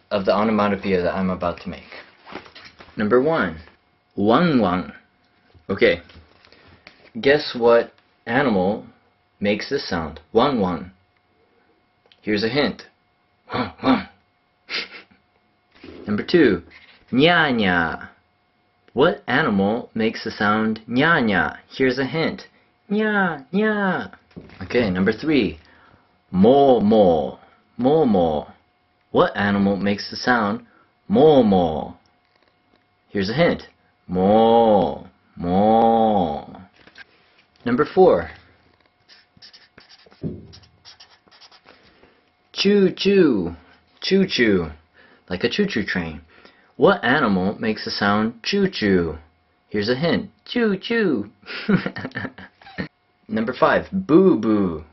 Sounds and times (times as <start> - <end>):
Speech: 0.1 - 2.1, 3.0 - 5.1, 5.7 - 6.1, 7.1 - 11.0, 12.2 - 14.2, 16.0 - 18.2, 18.9 - 25.6, 26.3 - 32.0, 33.1 - 36.7, 37.6 - 38.4, 42.5 - 51.4, 53.3 - 54.9.